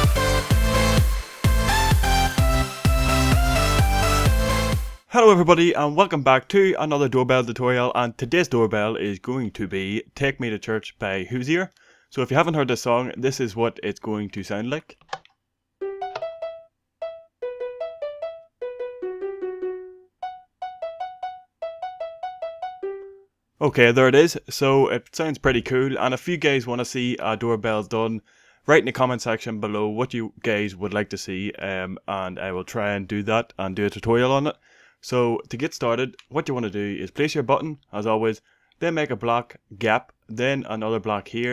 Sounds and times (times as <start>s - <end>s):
Speech: 5.1s - 15.0s, 23.6s - 41.5s
Musical instrument: 15.8s - 23.3s.